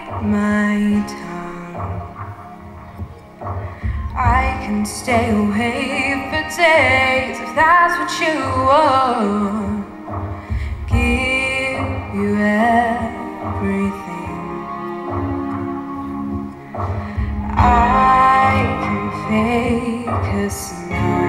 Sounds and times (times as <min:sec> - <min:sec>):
Female singing: 0:00.0 - 0:02.2, 0:04.1 - 0:10.0, 0:10.9 - 0:14.8, 0:17.5 - 0:21.2
Music: 0:00.0 - 0:21.2.